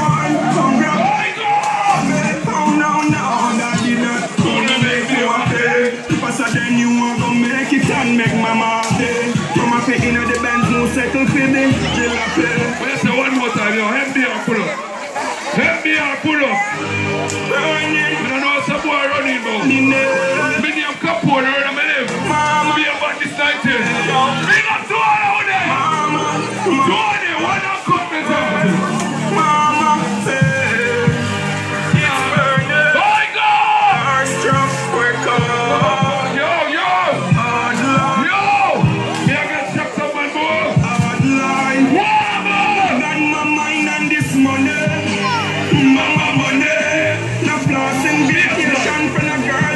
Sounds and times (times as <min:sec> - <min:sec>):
Music: 0:00.0 - 0:49.7
Speech: 0:09.6 - 0:16.8, 0:17.5 - 0:29.8.